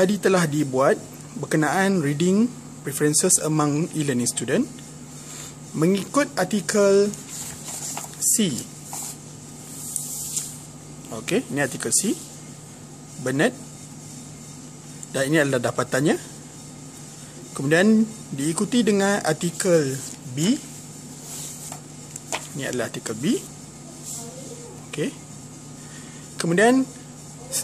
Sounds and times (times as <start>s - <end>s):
Speech: 0.0s - 4.8s, 5.7s - 7.2s, 8.2s - 8.8s, 11.1s - 12.4s, 13.2s - 13.6s, 15.1s - 16.4s, 17.5s - 20.7s, 22.5s - 25.2s, 26.4s - 27.6s.